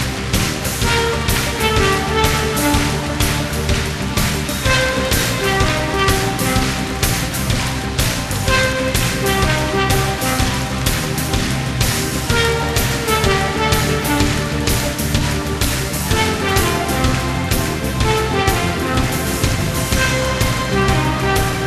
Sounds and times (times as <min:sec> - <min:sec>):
Music: 0:00.0 - 0:21.6.